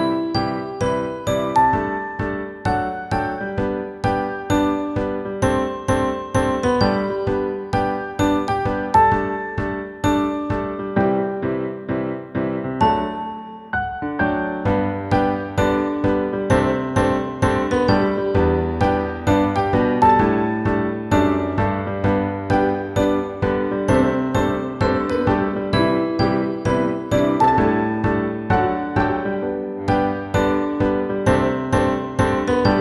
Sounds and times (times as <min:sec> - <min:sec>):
Music: 0:00.0 - 0:32.8.